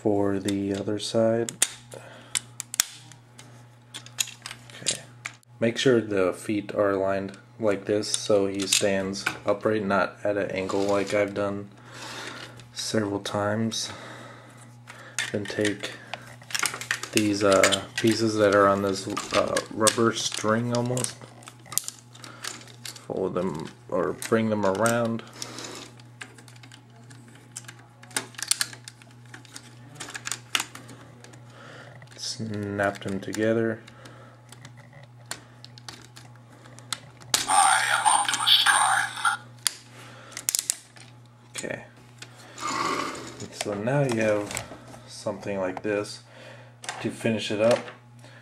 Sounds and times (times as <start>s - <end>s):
Speech: 0.0s - 1.5s, 5.6s - 11.7s, 17.2s - 21.1s, 23.1s - 25.2s, 37.5s - 39.4s, 45.1s - 46.2s, 47.0s - 47.9s.